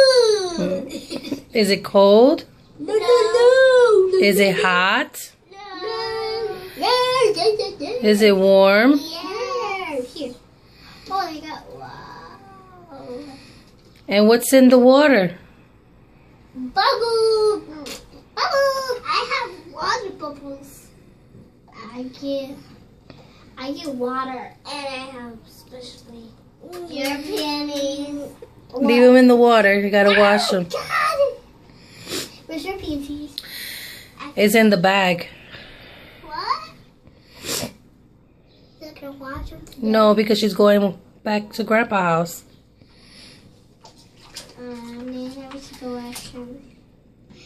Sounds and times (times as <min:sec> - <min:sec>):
Child speech, kid speaking: 0:00.0 - 0:01.0, 0:02.8 - 0:04.6, 0:05.5 - 0:08.2, 0:08.8 - 0:10.4, 0:11.1 - 0:13.4, 0:16.6 - 0:20.9, 0:21.7 - 0:22.8, 0:23.6 - 0:29.0, 0:30.0 - 0:31.4, 0:32.5 - 0:33.4, 0:36.2 - 0:36.8, 0:38.8 - 0:39.8, 0:44.5 - 0:46.8
Inside, small room: 0:00.0 - 0:47.4.